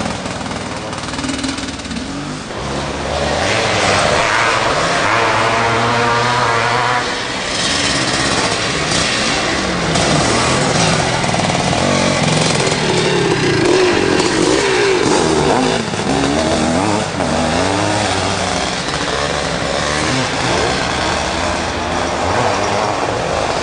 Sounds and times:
Motorcycle: 0.0 - 23.6
Outside, rural or natural: 0.0 - 23.6.

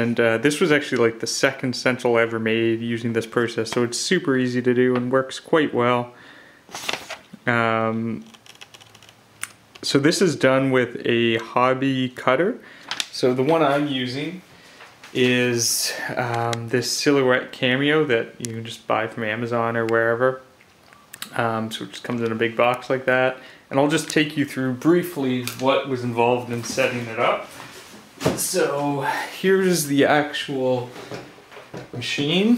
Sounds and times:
Speech: 0.0 - 6.2, 7.4 - 8.3, 9.8 - 14.5, 15.1 - 20.5, 21.2 - 27.6, 28.2 - 31.0, 31.8 - 32.5
Computer keyboard: 8.3 - 9.2.

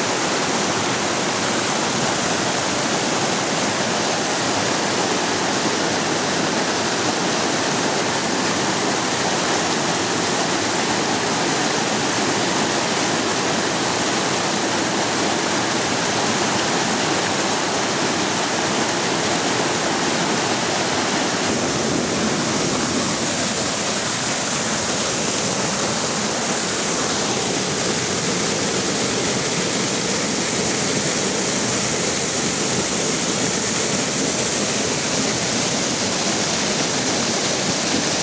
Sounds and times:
Waterfall: 0.0 - 38.2.

